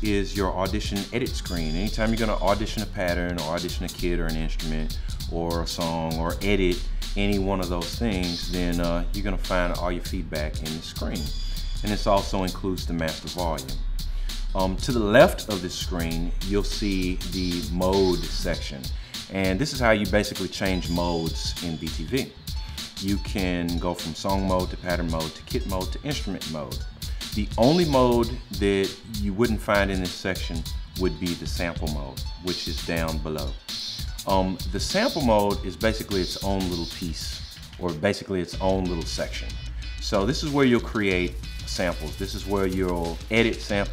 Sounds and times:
Drum machine: 0:00.0 - 0:37.9, 0:38.6 - 0:43.9.

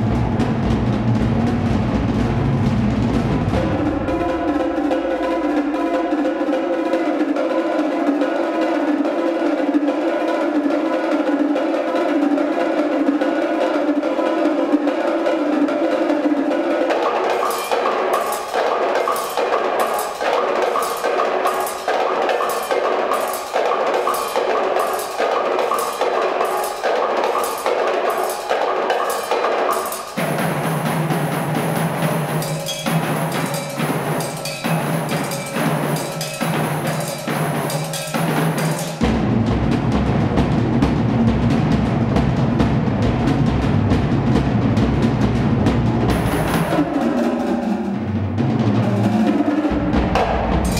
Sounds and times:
Percussion: 0:00.0 - 0:50.7.

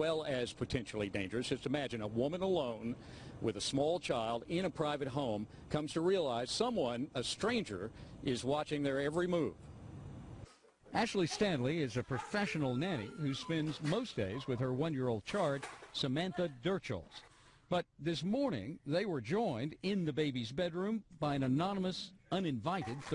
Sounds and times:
Speech: 0:11.0 - 0:17.2, 0:17.8 - 0:23.1.

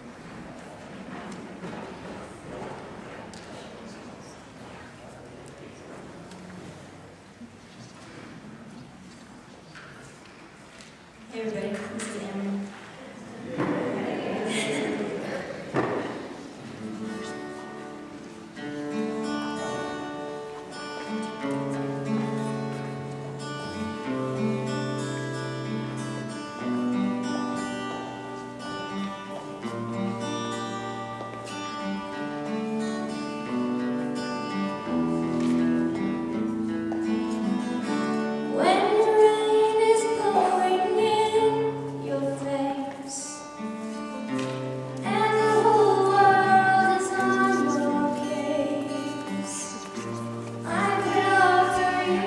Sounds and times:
Speech: 0:11.3 - 0:15.7.

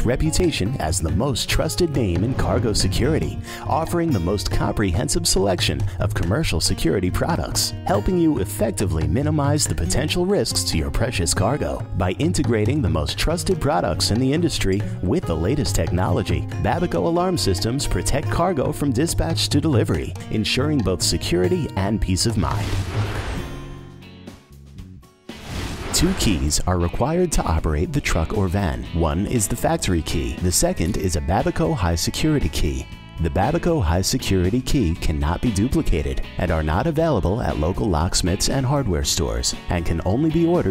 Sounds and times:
Speech: 0:00.0 - 0:22.7, 0:26.0 - 0:40.7
Music: 0:00.0 - 0:40.7.

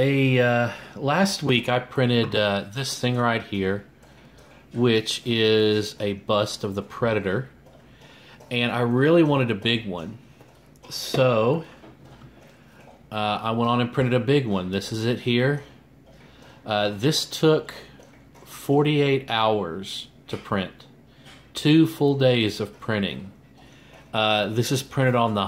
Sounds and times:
Speech: 0:00.0 - 0:03.9, 0:04.7 - 0:07.6, 0:08.4 - 0:10.2, 0:10.8 - 0:11.8, 0:13.1 - 0:15.8, 0:16.6 - 0:20.9, 0:21.5 - 0:23.4, 0:24.1 - 0:25.4.

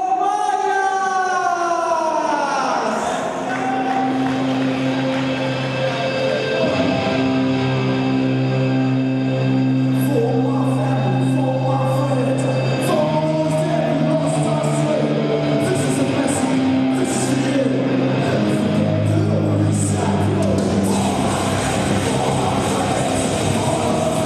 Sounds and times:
Speech: 0:00.0 - 0:04.1, 0:10.0 - 0:23.8
Music: 0:03.3 - 0:24.2.

